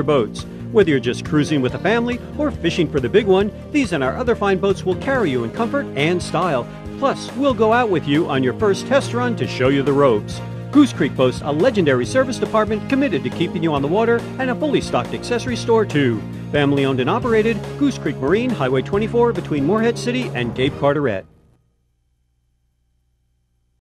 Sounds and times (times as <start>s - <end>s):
Speech: 0.0s - 21.3s
Music: 0.0s - 21.6s.